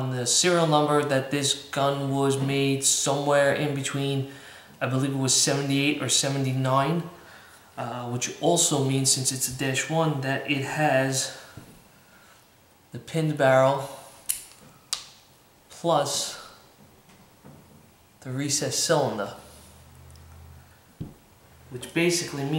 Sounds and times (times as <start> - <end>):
Speech: 0.0 - 7.2, 7.8 - 11.4, 12.9 - 14.0, 15.7 - 16.6, 18.2 - 19.5, 21.7 - 22.5
Inside, small room: 0.0 - 22.5.